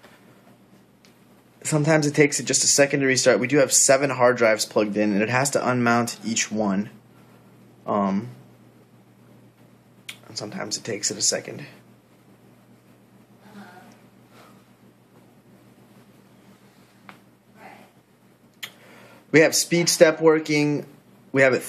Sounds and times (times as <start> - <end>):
Inside, small room: 0.0 - 21.6
Speech: 1.6 - 7.0, 7.9 - 8.4, 10.2 - 11.8, 19.3 - 21.6.